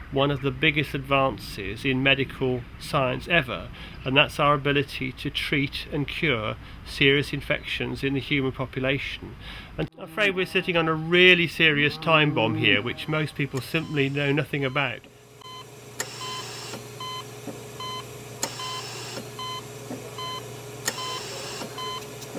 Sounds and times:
Speech: 0.0s - 15.1s.

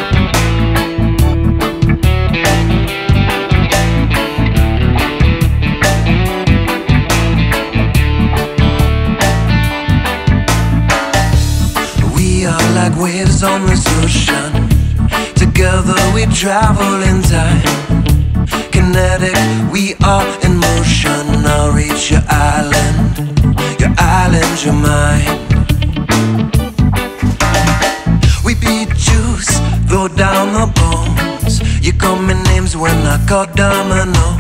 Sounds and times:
Background music: 0.0s - 34.4s.

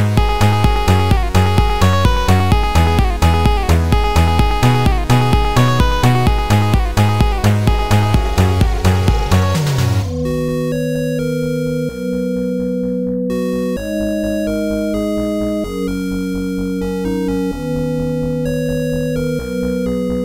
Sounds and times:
Music: 0.0s - 20.2s.

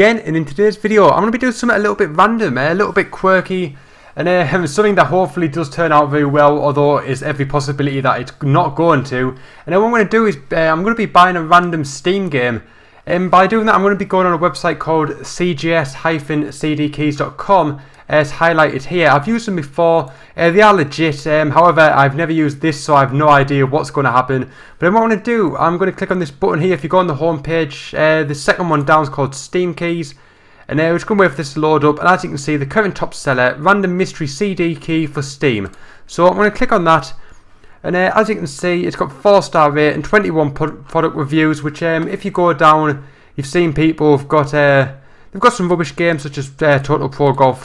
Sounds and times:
Speech: 0.0s - 37.2s, 37.8s - 47.6s.

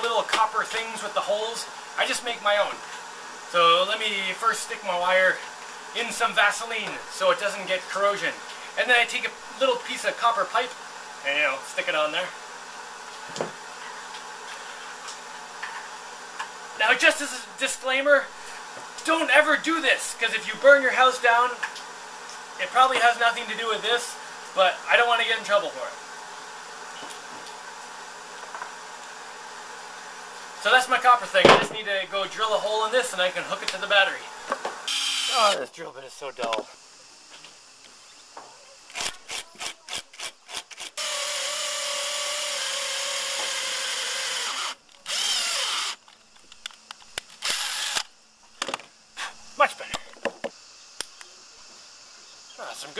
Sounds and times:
Drill: 34.9s - 35.6s, 38.9s - 46.0s, 47.4s - 48.1s.

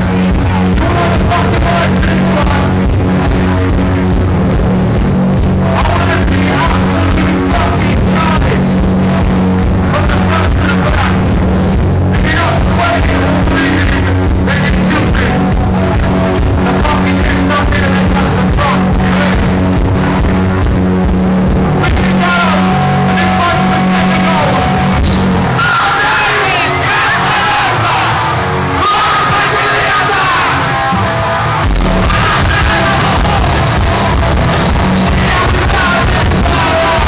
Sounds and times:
Music: 0.0s - 37.0s
Speech: 16.6s - 19.6s, 21.8s - 24.7s.

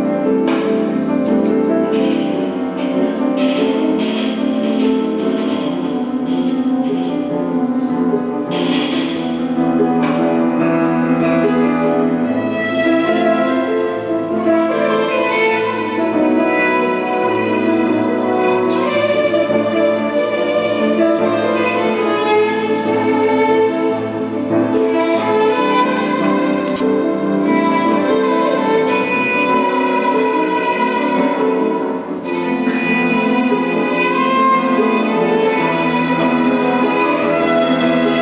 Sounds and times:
Violin, fiddle: 0.0s - 38.2s.

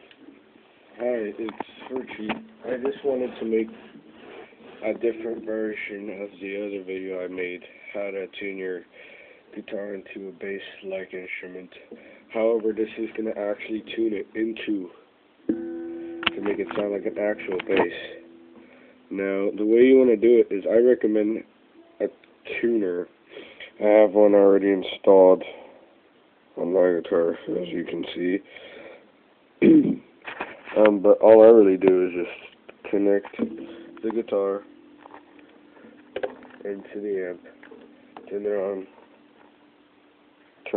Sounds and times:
Speech: 1.0s - 3.9s, 4.8s - 8.9s, 9.5s - 15.0s, 16.3s - 18.2s, 19.1s - 25.7s, 26.6s - 28.5s, 29.6s - 30.1s, 30.7s - 34.7s, 36.6s - 37.5s, 38.3s - 38.9s.

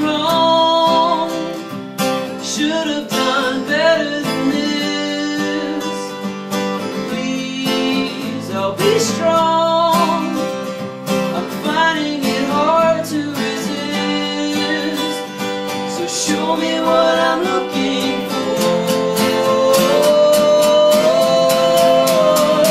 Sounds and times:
Music: 0.0s - 22.7s.

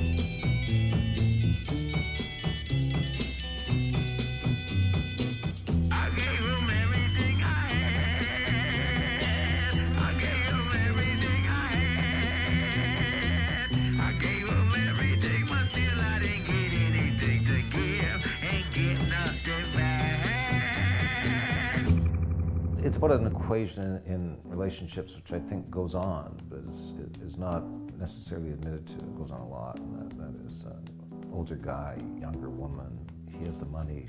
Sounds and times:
Music: 0.0s - 22.1s, 22.8s - 34.0s
Speech: 22.8s - 34.0s.

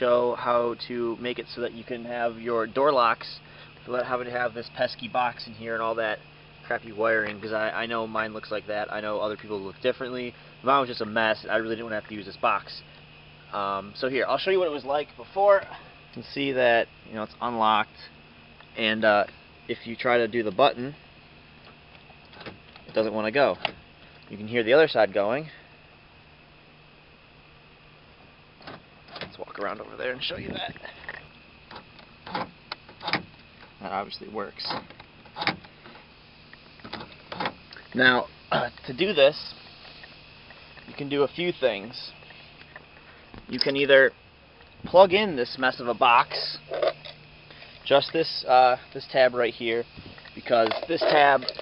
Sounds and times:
Speech: 0.0s - 12.8s, 13.5s - 18.2s, 18.8s - 21.0s, 22.9s - 23.7s, 24.3s - 25.6s, 29.3s - 30.8s, 33.8s - 34.8s, 37.9s - 39.6s, 40.8s - 42.2s, 43.5s - 44.2s, 44.8s - 46.8s, 47.8s - 51.6s.

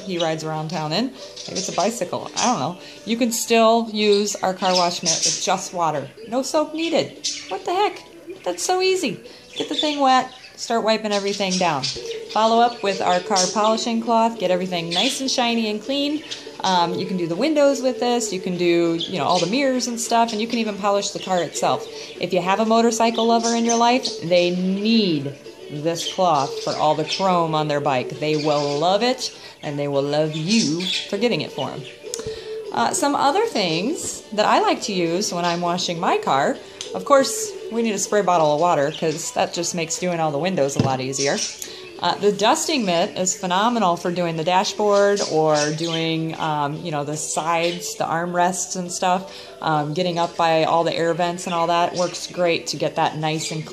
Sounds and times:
Speech: 0.0s - 31.9s, 32.7s - 53.7s.

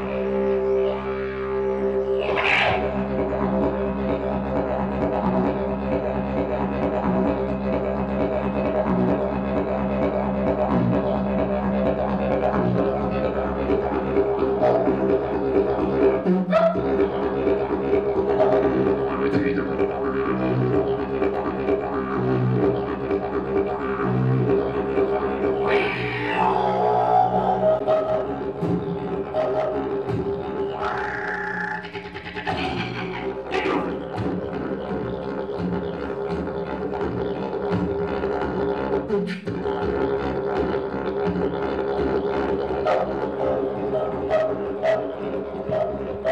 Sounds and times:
Didgeridoo: 0.0s - 46.3s.

